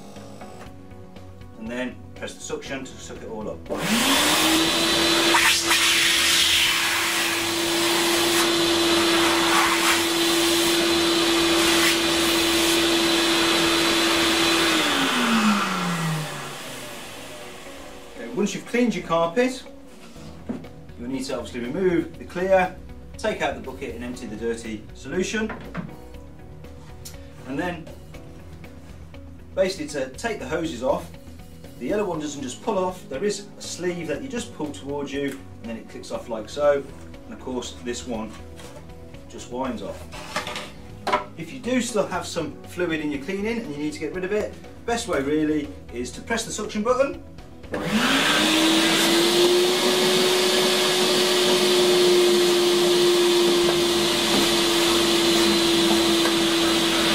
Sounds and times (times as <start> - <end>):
Speech: 1.6 - 3.6, 18.2 - 19.7, 21.0 - 25.6, 27.4 - 27.9, 29.6 - 31.1, 31.8 - 38.4, 39.3 - 40.0, 41.4 - 47.2
Vacuum cleaner: 3.7 - 18.4, 47.7 - 57.1.